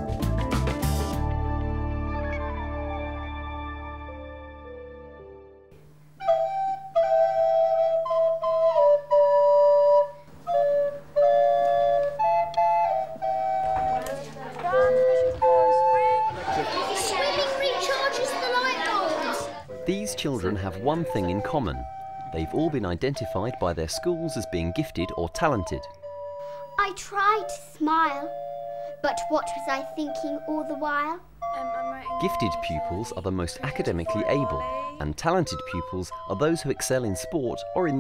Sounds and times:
Flute: 6.2s - 17.4s, 19.0s - 26.8s, 31.5s - 38.0s.

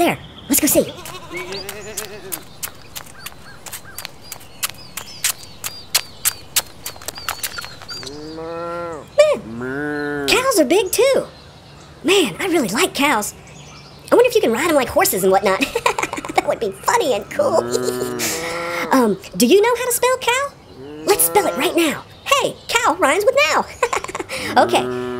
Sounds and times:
Speech: 0.0s - 1.0s, 9.1s - 9.6s, 10.2s - 11.3s, 12.0s - 13.4s, 14.1s - 15.7s, 16.4s - 23.7s, 24.4s - 25.1s.

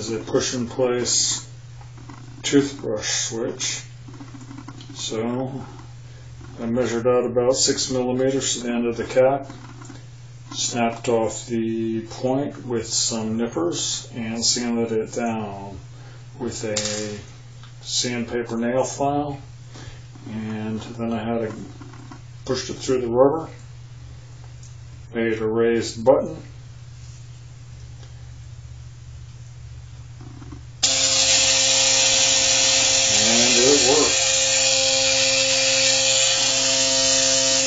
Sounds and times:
Speech: 0.0s - 1.5s, 2.4s - 3.9s, 5.0s - 5.7s, 6.6s - 9.5s, 10.6s - 15.8s, 16.4s - 19.5s, 20.3s - 21.7s, 22.4s - 23.6s, 25.1s - 26.6s, 33.1s - 34.2s
Electric toothbrush: 30.8s - 37.6s.

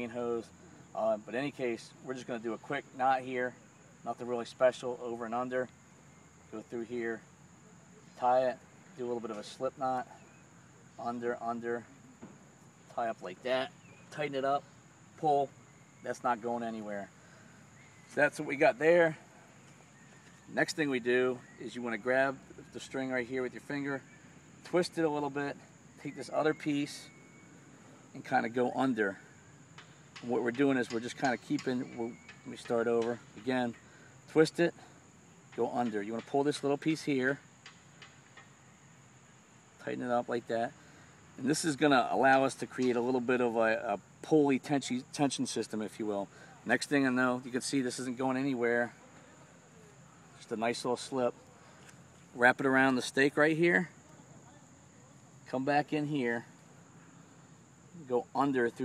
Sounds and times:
Speech: 0.0s - 5.7s, 6.5s - 7.2s, 8.2s - 10.2s, 11.0s - 11.9s, 12.9s - 14.6s, 15.2s - 15.5s, 16.1s - 17.1s, 18.1s - 19.3s, 20.5s - 24.0s, 24.7s - 27.1s, 28.2s - 29.2s, 30.2s - 34.9s, 35.6s - 37.4s, 39.8s - 40.8s, 41.4s - 49.0s, 50.4s - 51.4s, 52.4s - 54.6s, 55.4s - 56.5s, 58.0s - 58.8s
Outside, rural or natural: 0.0s - 58.8s.

